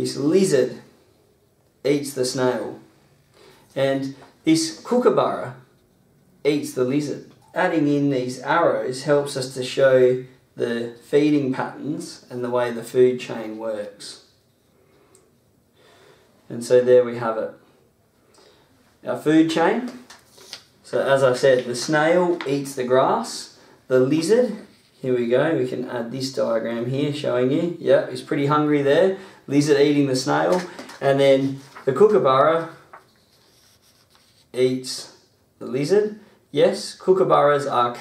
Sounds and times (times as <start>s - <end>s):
Speech: 0.0s - 0.9s, 1.8s - 2.9s, 3.8s - 5.7s, 6.4s - 14.3s, 16.5s - 17.7s, 19.0s - 20.1s, 20.8s - 32.9s, 34.5s - 38.0s
Inside, small room: 0.0s - 38.0s.